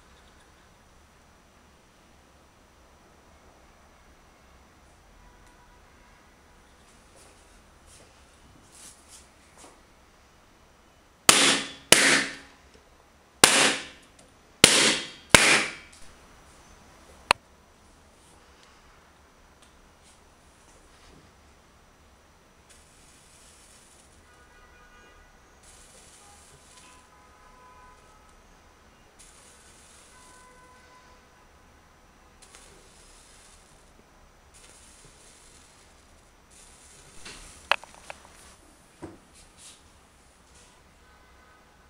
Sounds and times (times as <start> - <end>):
Inside, small room: 0.0 - 41.9.